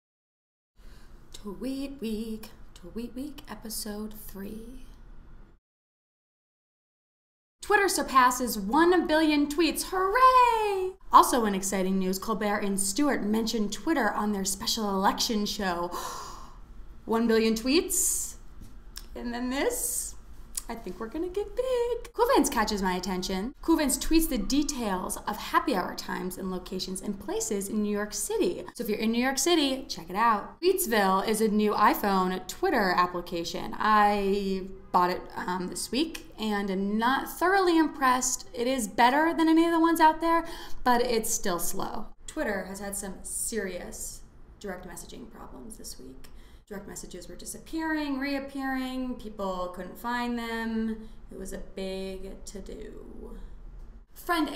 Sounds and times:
Speech: 1.4s - 5.0s, 7.6s - 16.0s, 17.1s - 18.4s, 19.0s - 53.5s, 54.2s - 54.5s.

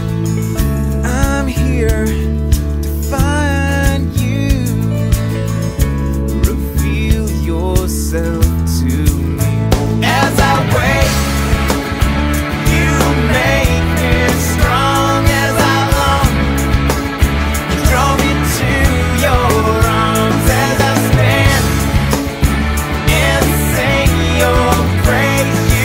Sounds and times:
Independent music: 0.0s - 25.8s.

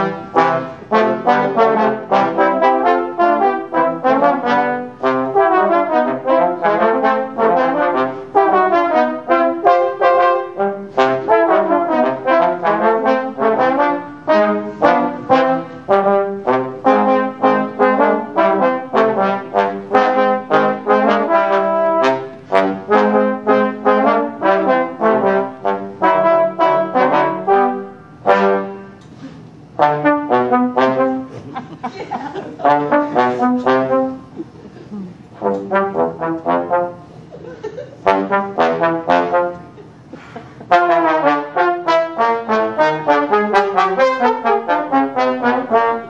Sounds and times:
Music: 0.0s - 31.4s, 32.6s - 34.4s, 35.3s - 37.1s, 38.0s - 46.0s.

